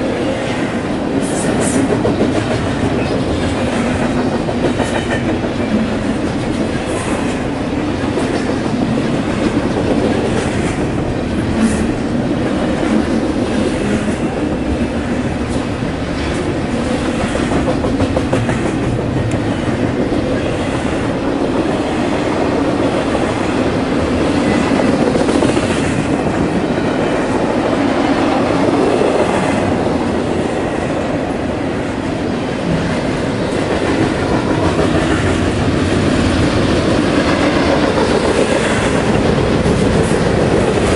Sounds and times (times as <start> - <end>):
Railroad car, train wagon: 0.0 - 40.9
Train: 0.0 - 40.9
Clickety-clack: 0.5 - 12.0, 12.8 - 21.6, 22.2 - 30.0, 32.6 - 40.9.